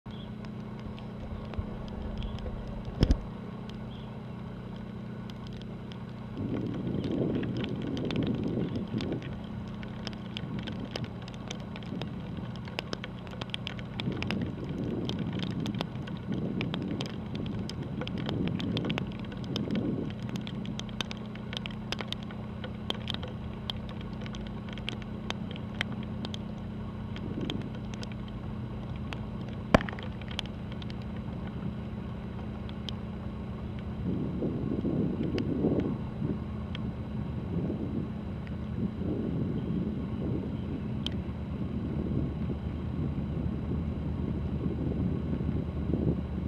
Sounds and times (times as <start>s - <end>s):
Ship: 0.1s - 46.4s.